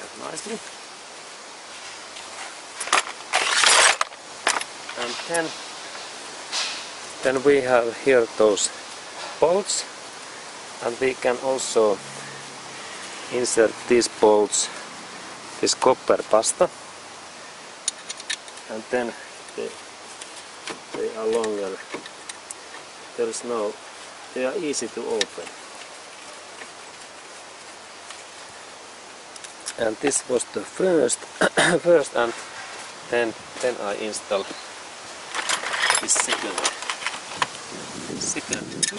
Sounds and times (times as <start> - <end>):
Speech: 0.0 - 0.7, 5.0 - 5.6, 7.2 - 8.8, 9.4 - 9.9, 10.8 - 12.0, 13.3 - 14.8, 15.6 - 16.7, 18.7 - 19.8, 21.0 - 21.8, 23.2 - 25.5, 29.8 - 32.4, 33.1 - 34.6, 36.0 - 36.7.